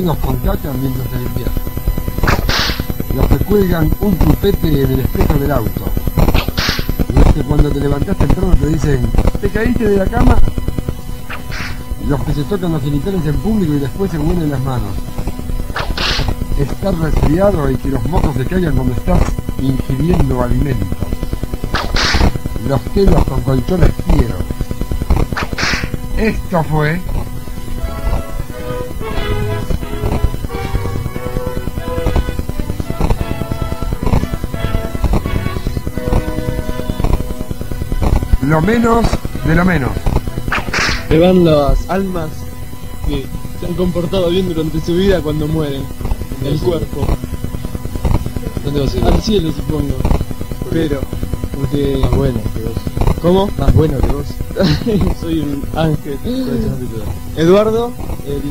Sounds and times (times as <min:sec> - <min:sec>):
Speech: 0:00.0 - 0:01.6, 0:03.1 - 0:06.0, 0:07.1 - 0:10.5, 0:12.0 - 0:15.0, 0:16.6 - 0:21.0, 0:22.6 - 0:24.5, 0:26.2 - 0:27.0, 0:38.4 - 0:40.0, 0:41.1 - 0:42.4, 0:43.0 - 0:47.2, 0:48.4 - 0:58.5.